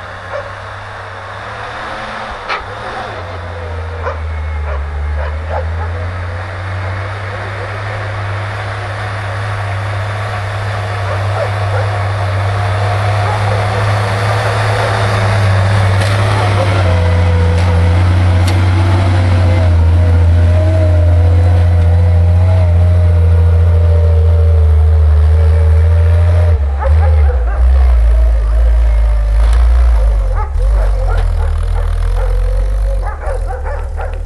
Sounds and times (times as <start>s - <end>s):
Truck: 0.0s - 34.2s.